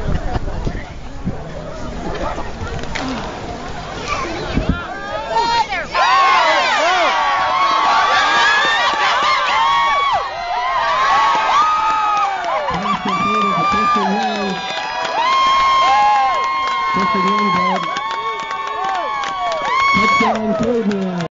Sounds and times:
Speech: 20.0s - 21.3s.

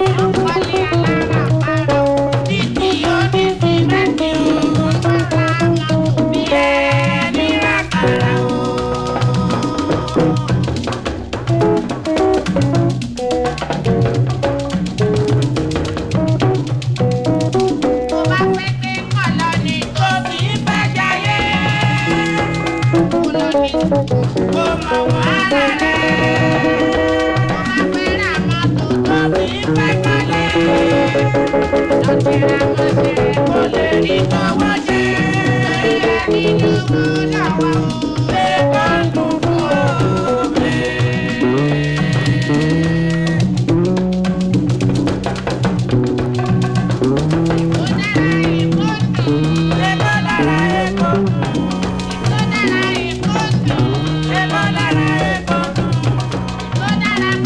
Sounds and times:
Music of Africa: 0.0s - 57.4s.

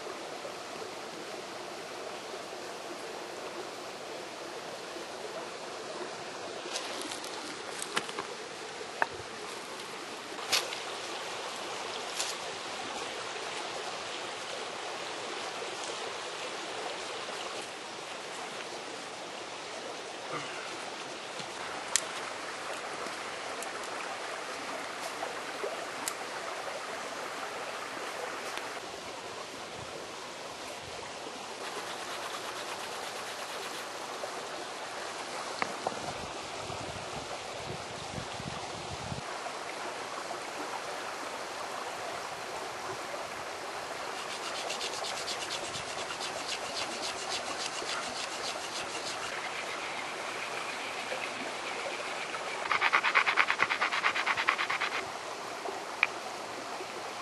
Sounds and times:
Outside, rural or natural: 0.0s - 57.2s.

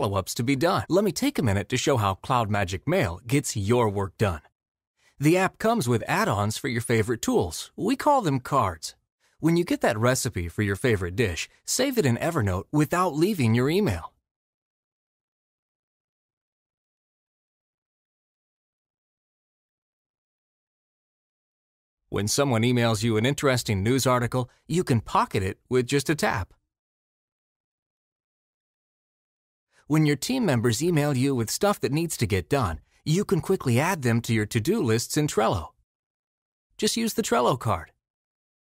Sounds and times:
Speech: 0.0s - 4.5s, 5.2s - 14.2s, 22.2s - 26.6s, 29.9s - 35.8s, 36.8s - 38.0s.

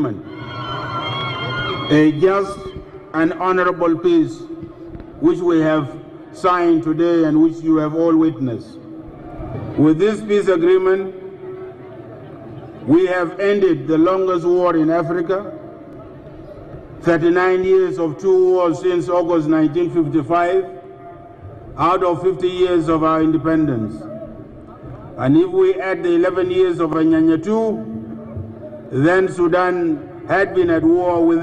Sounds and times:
Male speech, man speaking: 0.0s - 0.2s, 1.9s - 4.5s, 5.2s - 8.8s, 9.8s - 11.2s, 12.9s - 15.6s, 17.0s - 20.7s, 21.8s - 24.2s, 25.2s - 28.0s, 28.9s - 31.4s
Narration, monologue: 0.0s - 0.3s, 1.9s - 9.1s, 9.7s - 11.4s, 12.4s - 31.4s.

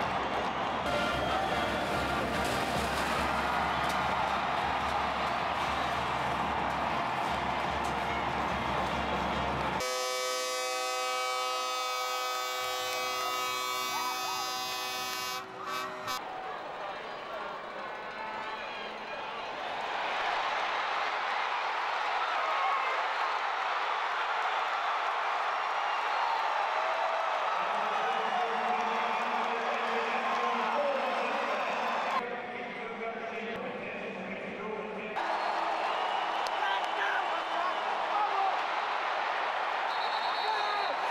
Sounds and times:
Civil defense siren: 9.8s - 16.2s.

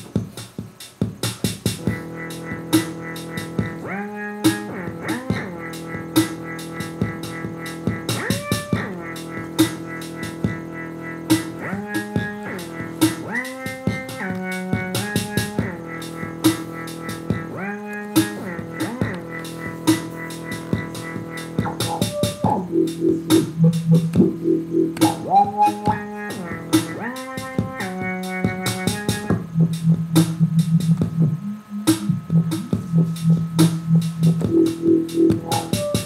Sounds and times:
Dubstep: 0.0s - 36.0s.

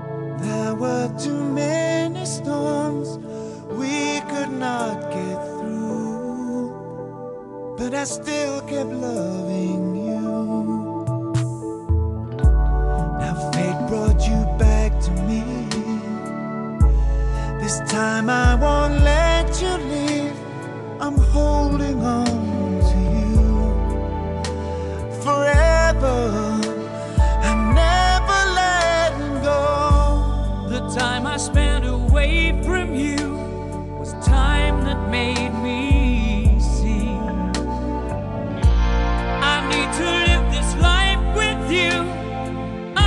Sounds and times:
Music: 0.0s - 43.0s.

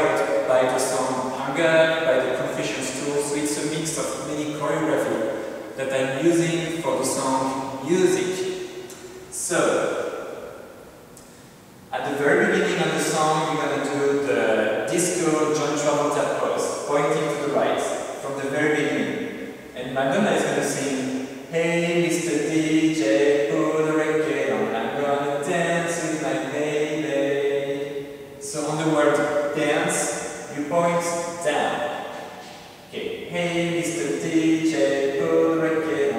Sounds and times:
Speech: 0.0s - 8.5s, 9.3s - 9.9s, 11.9s - 19.2s, 19.8s - 31.9s, 32.9s - 36.1s.

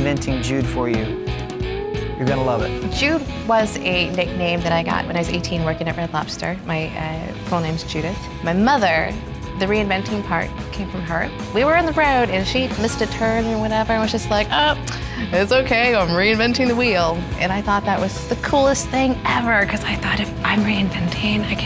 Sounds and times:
Music: 0.0s - 21.6s.

